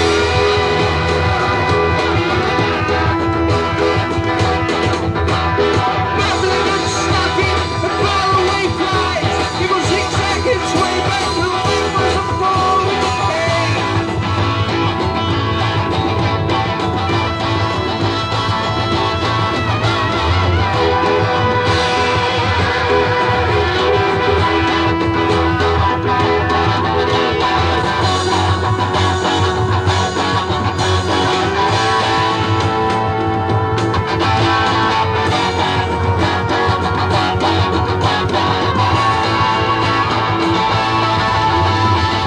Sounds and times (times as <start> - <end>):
Electric guitar: 0.0 - 42.2
Rock music: 0.0 - 42.2.